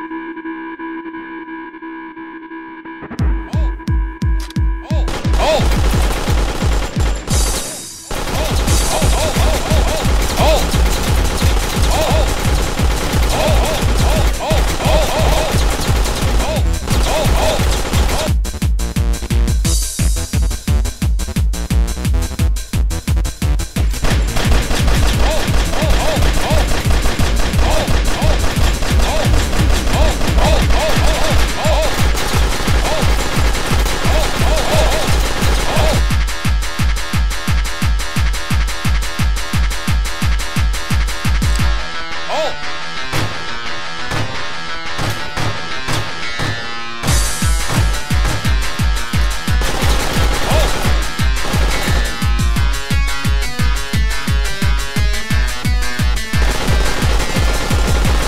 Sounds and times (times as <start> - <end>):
Music: 0.0 - 58.2.